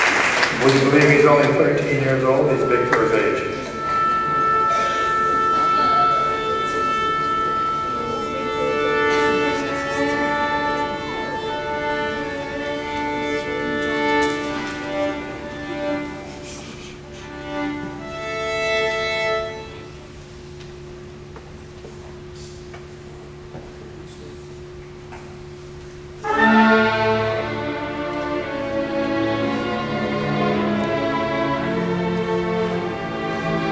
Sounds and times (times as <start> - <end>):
Violin, fiddle: 1.0 - 20.0.